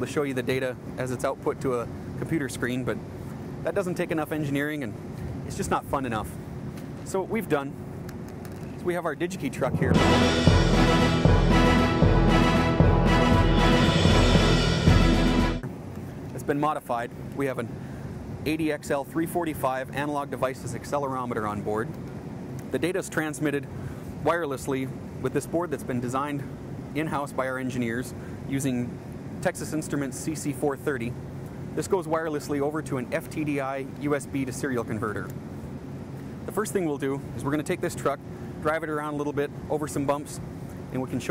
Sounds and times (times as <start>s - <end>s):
Speech: 0.0s - 3.0s, 3.6s - 6.4s, 7.1s - 7.8s, 8.8s - 10.0s, 16.3s - 17.8s, 18.4s - 21.9s, 22.7s - 31.2s, 31.8s - 35.4s, 36.5s - 41.3s
Music: 9.9s - 15.6s.